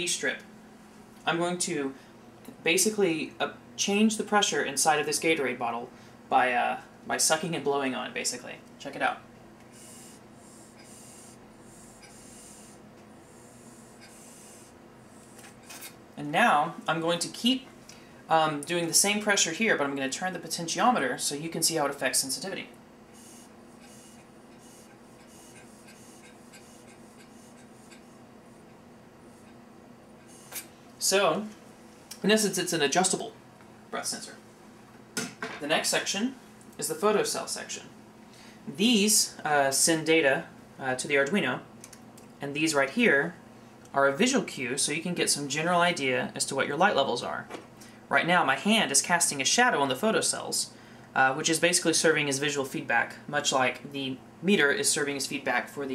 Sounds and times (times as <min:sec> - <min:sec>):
Speech: 0:00.0 - 0:00.5, 0:01.2 - 0:09.2, 0:16.2 - 0:17.7, 0:18.3 - 0:22.8, 0:31.0 - 0:31.6, 0:32.2 - 0:34.4, 0:35.6 - 0:38.0, 0:38.7 - 0:41.7, 0:42.4 - 0:55.9.